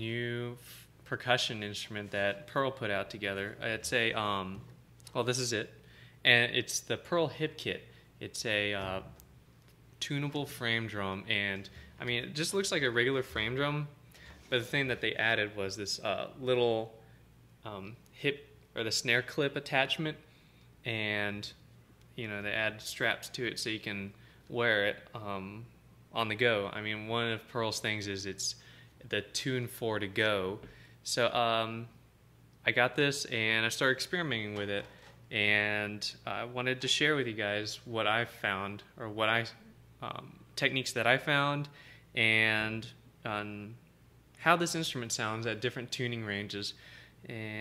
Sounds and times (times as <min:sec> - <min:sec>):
Speech: 0:00.0 - 0:09.2, 0:10.0 - 0:17.0, 0:17.6 - 0:21.6, 0:22.2 - 0:32.0, 0:32.6 - 0:43.8, 0:44.4 - 0:47.6.